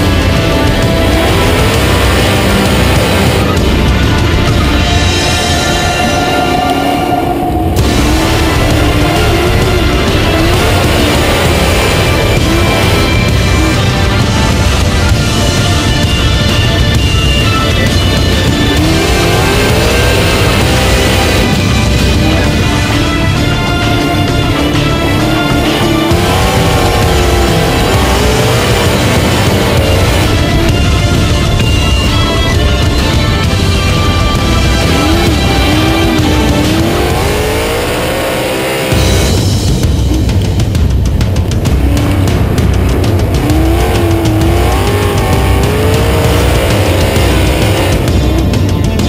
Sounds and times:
Car: 0.0 - 49.0
Music: 0.0 - 49.0.

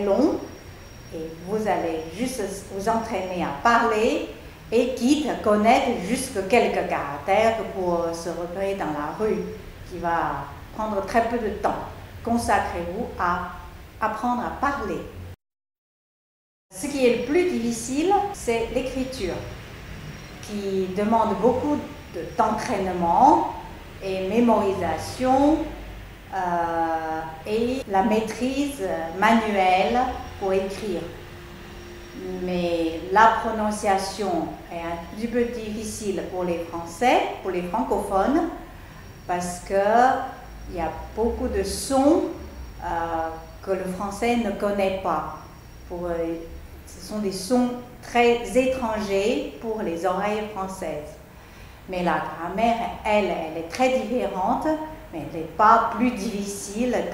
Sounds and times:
Speech: 0.0 - 0.5, 1.1 - 15.1, 16.7 - 19.6, 20.4 - 31.2, 32.2 - 38.6, 39.3 - 51.2, 51.9 - 57.1.

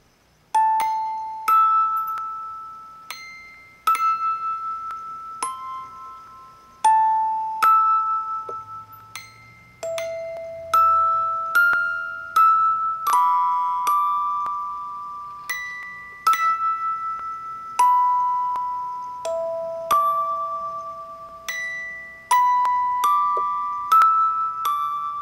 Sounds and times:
Music: 0.5 - 25.2.

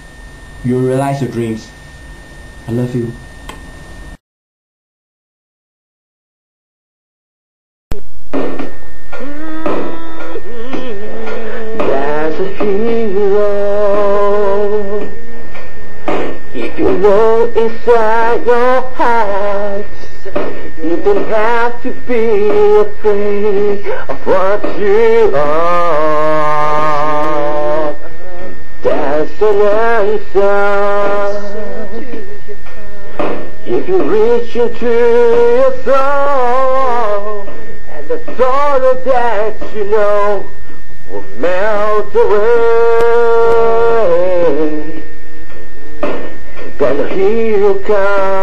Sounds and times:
Speech: 0.7 - 1.7, 2.7 - 3.2.

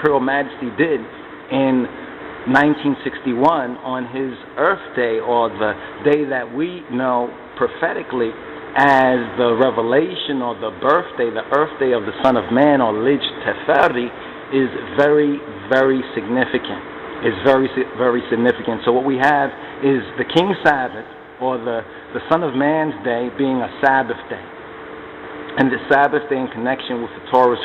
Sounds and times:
Speech: 0.0 - 24.5, 25.5 - 27.6.

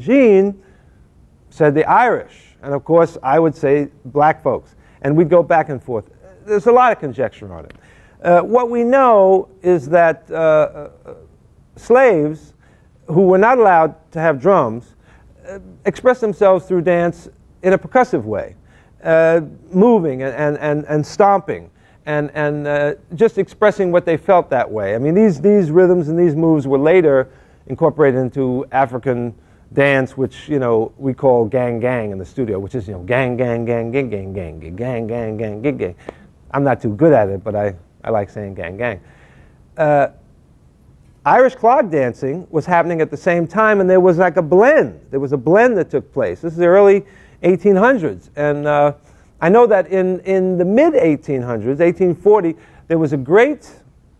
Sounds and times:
Speech: 0.0 - 0.6, 1.5 - 39.0, 39.8 - 40.2, 41.2 - 53.8.

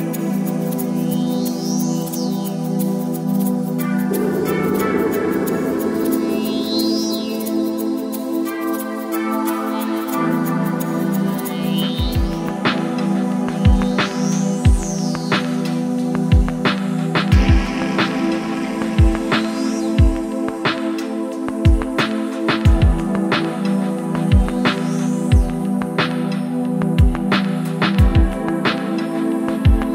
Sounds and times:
Music: 0.0 - 29.9.

